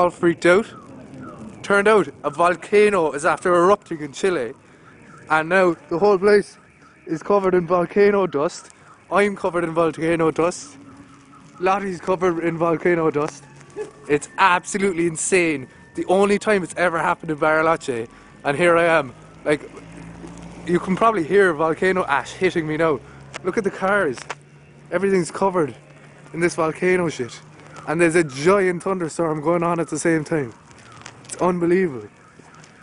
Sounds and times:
Speech: 0:00.0 - 0:00.8, 0:01.6 - 0:04.6, 0:05.3 - 0:10.8, 0:11.6 - 0:13.4, 0:14.1 - 0:19.8, 0:20.7 - 0:24.2, 0:24.9 - 0:25.8, 0:26.4 - 0:30.6, 0:31.3 - 0:32.2.

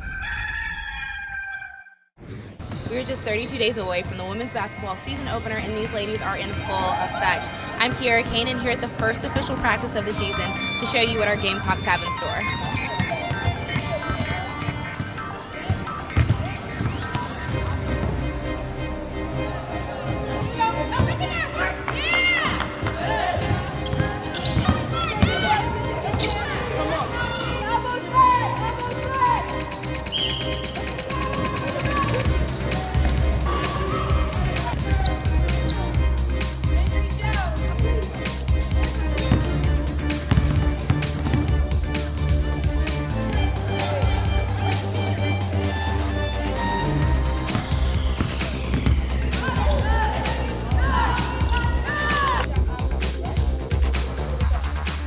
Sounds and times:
Crowd: 0:02.8 - 0:55.0.

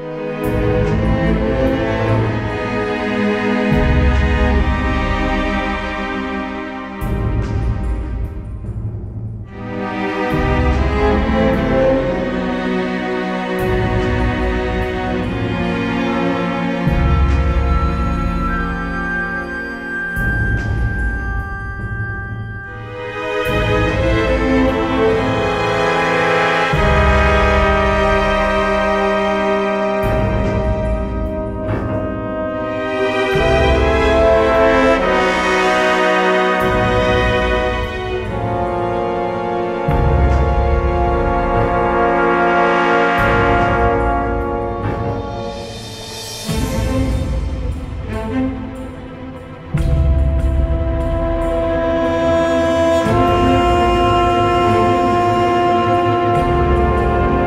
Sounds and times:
Music: 0:00.0 - 0:57.4.

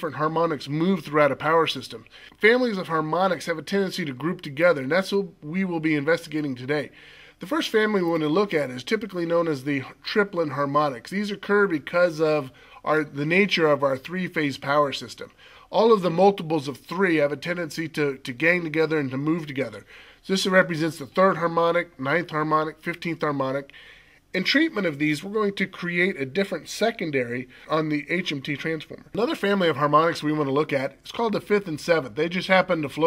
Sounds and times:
Speech: 0:00.0 - 0:23.7, 0:24.3 - 0:33.0.

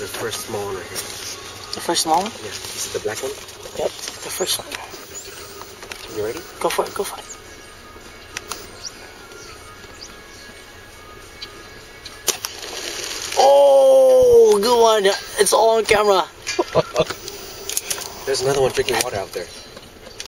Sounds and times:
Speech: 0:18.3 - 0:19.6.

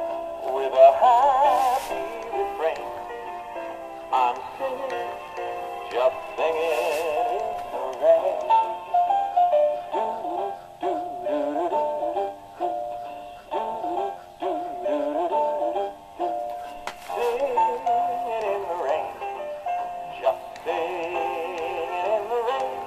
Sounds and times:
Music: 0:00.0 - 0:22.8
Male singing: 0:00.4 - 0:03.2, 0:04.1 - 0:08.7, 0:17.0 - 0:19.4, 0:20.1 - 0:22.8
Synthetic singing: 0:00.4 - 0:03.2, 0:04.1 - 0:08.8, 0:09.8 - 0:16.4, 0:17.1 - 0:19.4, 0:20.1 - 0:22.8.

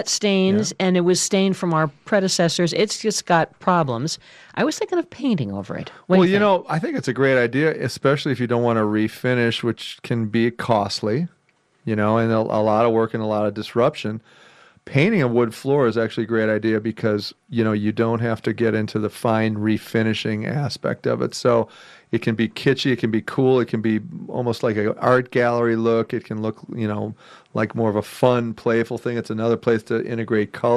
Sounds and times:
Speech: 0:00.0 - 0:11.3, 0:11.9 - 0:14.2, 0:14.9 - 0:30.7.

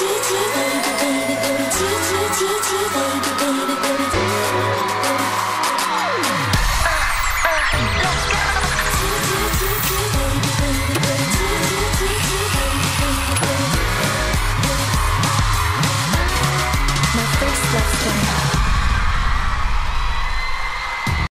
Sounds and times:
Dance music: 0:00.0 - 0:21.3
Speech: 0:17.2 - 0:18.5.

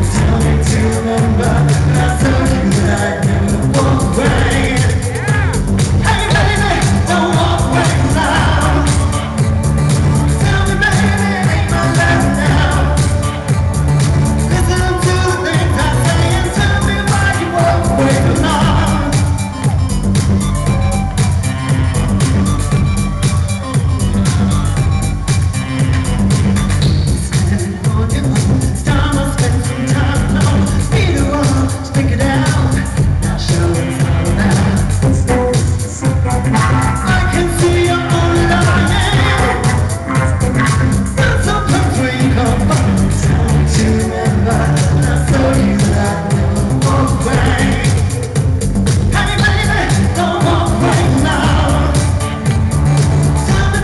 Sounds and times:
Music: 0:00.0 - 0:53.8.

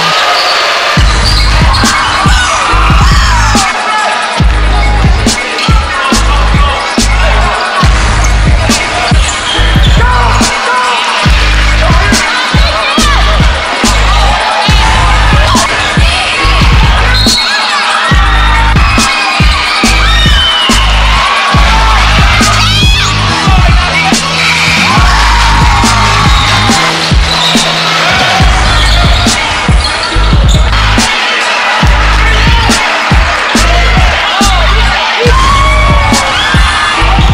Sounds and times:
Music: 0:00.0 - 0:37.3.

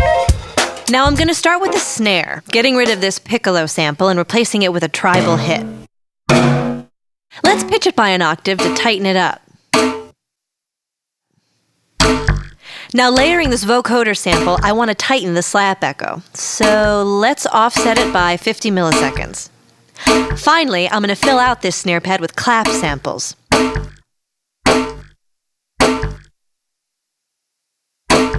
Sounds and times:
Speech: 0:00.9 - 0:05.8, 0:07.4 - 0:09.4, 0:12.9 - 0:23.4.

